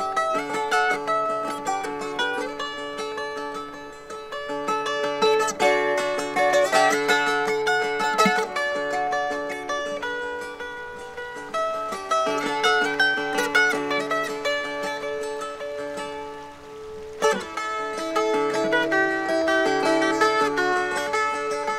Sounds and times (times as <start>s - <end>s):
Ukulele: 0.0s - 21.7s.